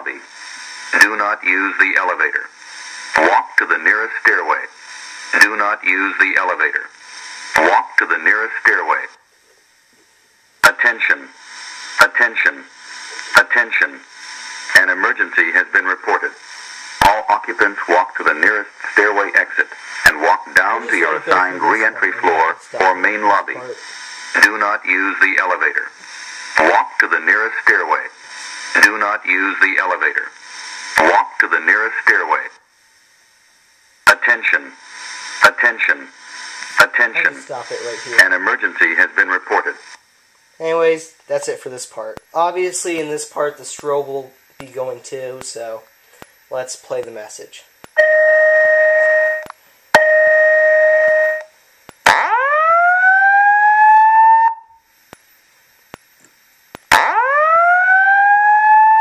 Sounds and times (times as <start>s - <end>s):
Speech: 0.0s - 0.3s, 0.9s - 2.5s, 3.2s - 6.9s, 7.6s - 9.2s, 10.6s - 11.4s, 12.0s - 14.1s, 14.7s - 26.0s, 26.6s - 30.4s, 31.0s - 32.6s, 34.1s - 34.8s, 35.4s - 36.2s, 36.8s - 39.9s, 40.6s - 45.9s, 46.5s - 47.7s
Fire alarm: 48.0s - 54.9s, 56.9s - 59.0s.